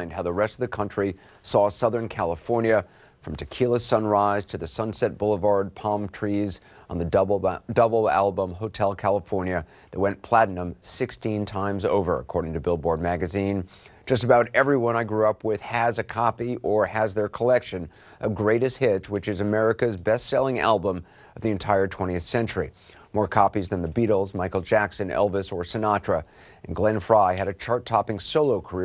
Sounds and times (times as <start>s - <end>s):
Speech: 0.0s - 28.8s.